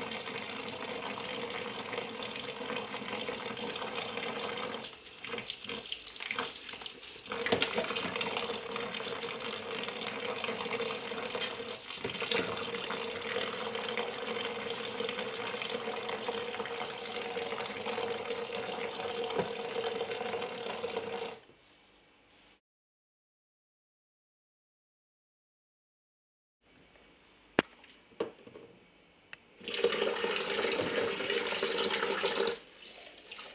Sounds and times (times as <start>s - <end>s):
Water: 0.0s - 21.4s, 29.6s - 33.5s
Water tap, faucet: 0.0s - 21.4s, 29.6s - 33.5s.